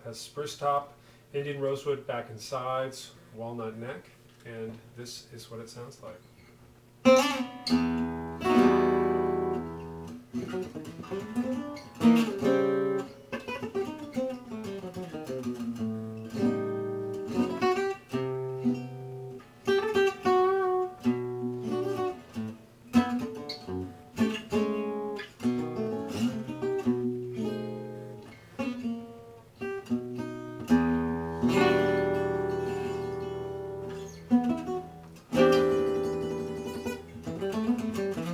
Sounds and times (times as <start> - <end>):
Strum: 7.0 - 38.3.